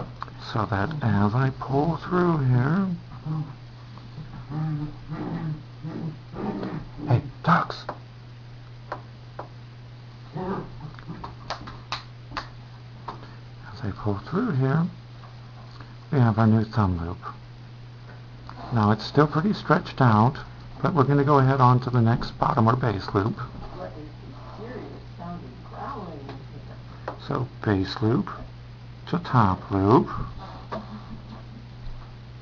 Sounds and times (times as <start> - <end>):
Speech: 0.4 - 3.0, 7.1 - 8.0, 13.6 - 15.0, 16.1 - 17.4, 18.6 - 30.3.